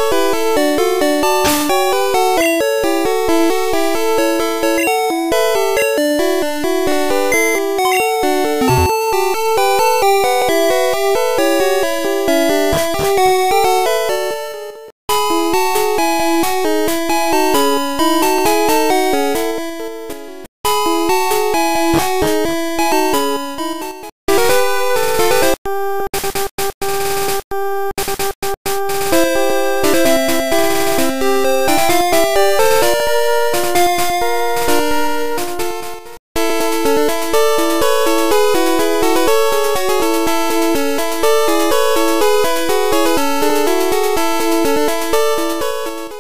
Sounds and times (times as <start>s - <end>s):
Music: 0.0s - 25.6s, 28.8s - 46.2s.